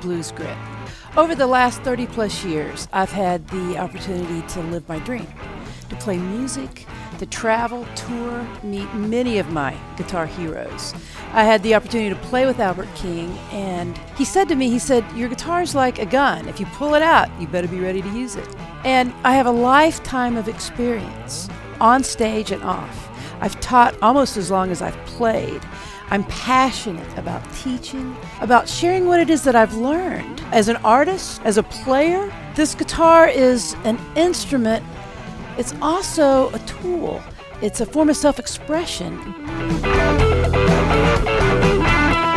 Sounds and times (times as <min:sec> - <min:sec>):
Speech: 0:00.0 - 0:34.9, 0:35.6 - 0:39.3
Guitar: 0:00.0 - 0:42.3.